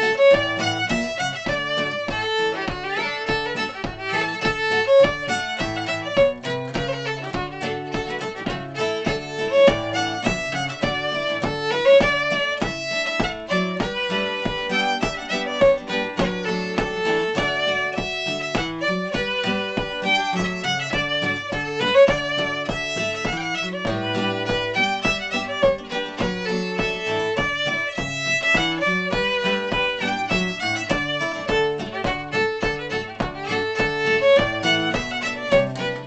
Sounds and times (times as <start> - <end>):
Violin, fiddle: 0.0 - 36.0.